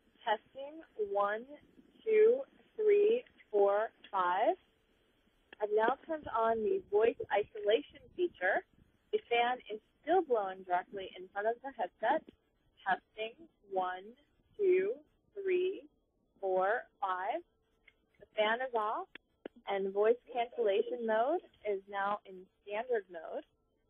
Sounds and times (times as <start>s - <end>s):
Speech: 0.3s - 4.6s, 5.6s - 8.6s, 9.2s - 17.4s, 18.2s - 23.4s.